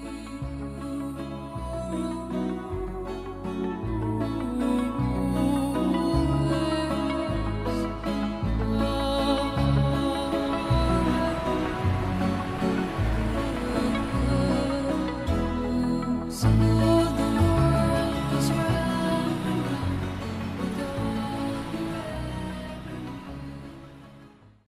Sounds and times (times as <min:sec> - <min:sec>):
Music: 0:00.0 - 0:24.6.